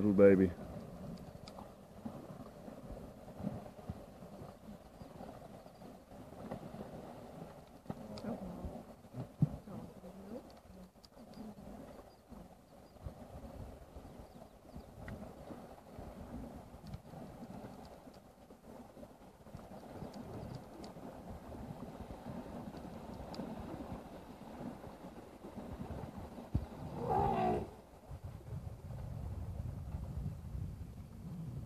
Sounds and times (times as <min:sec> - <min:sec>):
Outside, rural or natural: 0:00.0 - 0:31.6
Wild animals: 0:26.9 - 0:27.8.